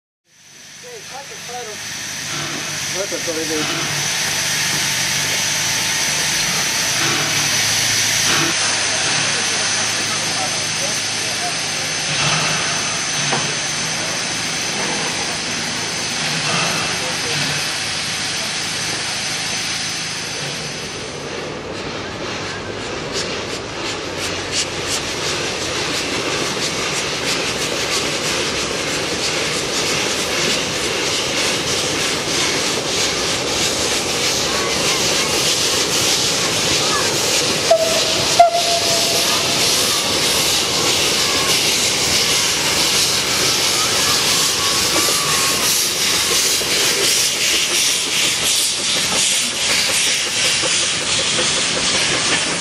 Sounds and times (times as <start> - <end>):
Hiss: 0.3 - 21.8, 22.4 - 52.6.